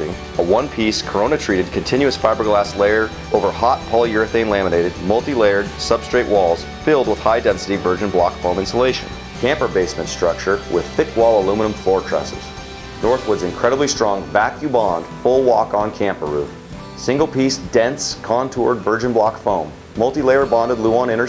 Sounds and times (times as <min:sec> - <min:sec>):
Music: 0:00.0 - 0:21.2
Speech: 0:00.0 - 0:21.2.